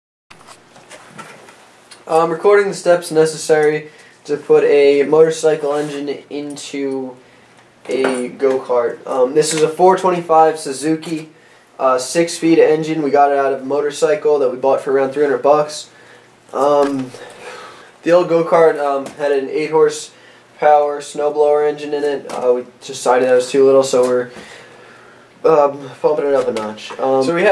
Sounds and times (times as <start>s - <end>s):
Speech: 2.1s - 7.2s, 7.9s - 15.9s, 16.5s - 17.2s, 18.0s - 24.4s, 25.4s - 27.5s.